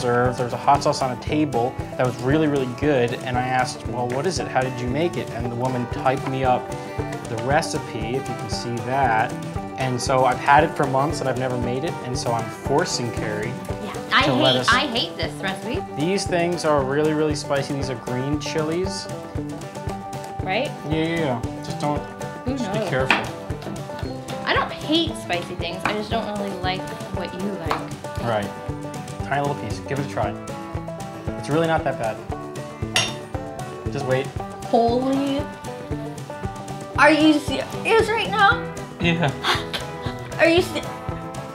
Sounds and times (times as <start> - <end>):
Music: 0.0 - 41.5
Speech: 13.8 - 14.9, 22.5 - 23.0.